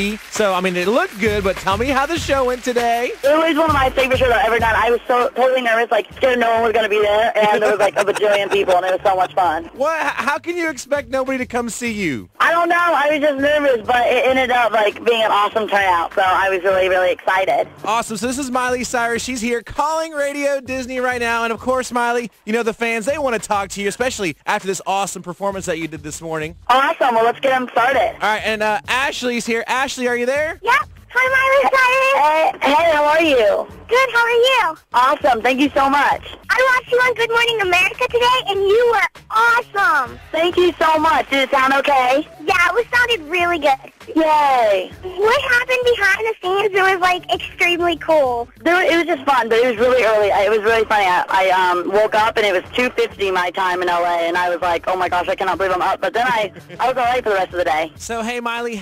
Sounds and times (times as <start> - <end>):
Music: 0.0 - 58.8
Speech: 0.0 - 58.8.